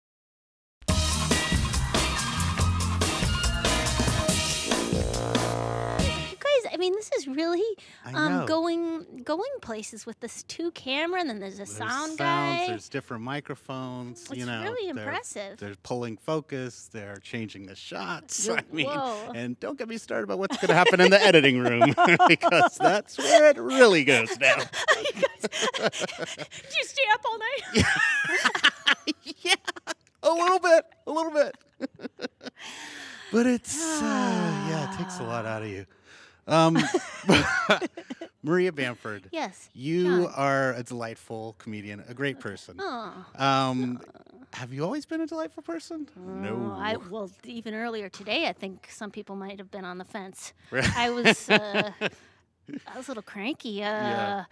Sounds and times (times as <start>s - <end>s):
Speech: 8.1s - 24.7s, 30.2s - 31.5s, 33.4s - 35.8s, 36.5s - 37.8s, 38.4s - 49.1s, 50.0s - 52.0s, 52.8s - 54.5s.